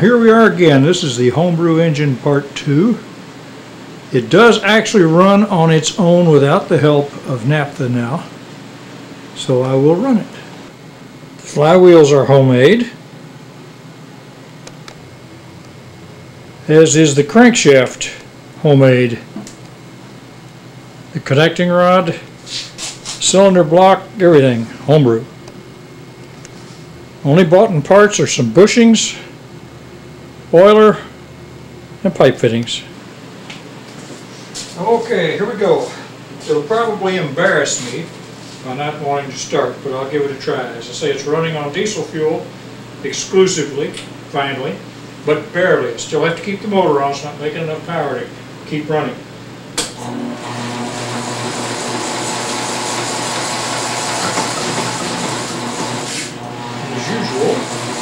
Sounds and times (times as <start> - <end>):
Speech: 0.0 - 3.1, 4.1 - 8.4, 9.4 - 10.5, 11.4 - 13.0, 16.6 - 19.3, 21.1 - 22.3, 23.2 - 25.3, 27.2 - 29.3, 30.5 - 31.2, 32.0 - 33.0, 34.7 - 49.2, 56.8 - 57.7.